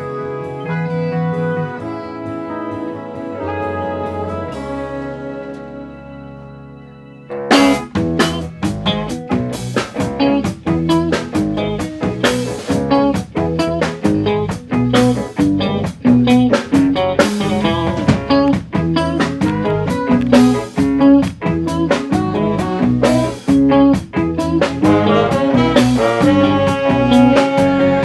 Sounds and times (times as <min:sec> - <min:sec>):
Jazz: 0:00.0 - 0:28.0.